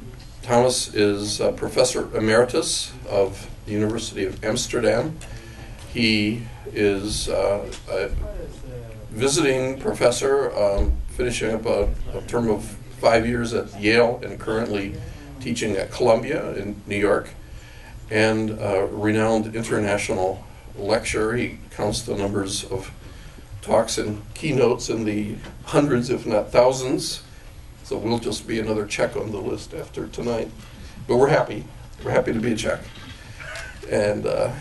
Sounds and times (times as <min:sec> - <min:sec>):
Speech: 0:00.4 - 0:05.2, 0:05.9 - 0:17.4, 0:18.1 - 0:23.0, 0:23.6 - 0:32.9, 0:33.8 - 0:34.6.